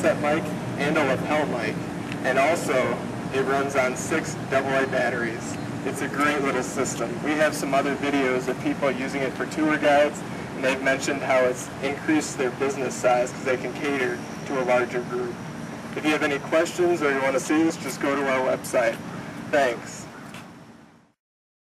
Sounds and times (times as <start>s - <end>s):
Speech: 0.0s - 15.4s, 16.0s - 20.1s.